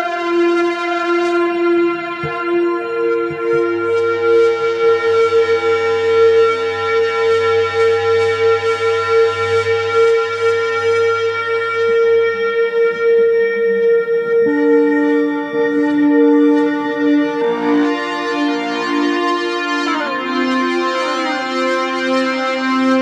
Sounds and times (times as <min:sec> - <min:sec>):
Electric guitar: 0:00.0 - 0:23.0
Inside, small room: 0:00.0 - 0:23.0.